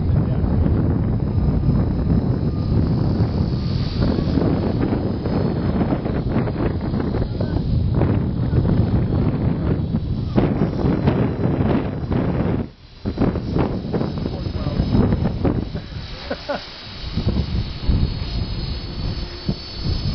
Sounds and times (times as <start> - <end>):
Wind noise (microphone): 0.0 - 20.1.